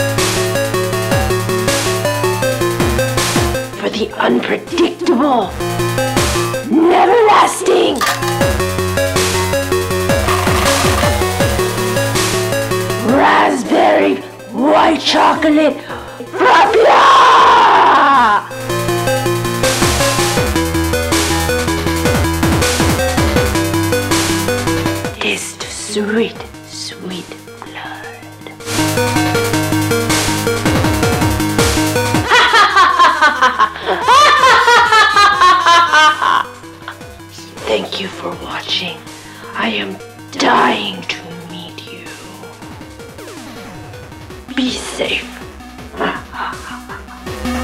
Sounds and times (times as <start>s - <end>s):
Music: 0.0s - 47.6s
Speech: 3.8s - 5.5s, 6.7s - 8.0s, 13.0s - 15.8s, 37.6s - 39.0s, 39.6s - 42.2s, 44.5s - 45.4s.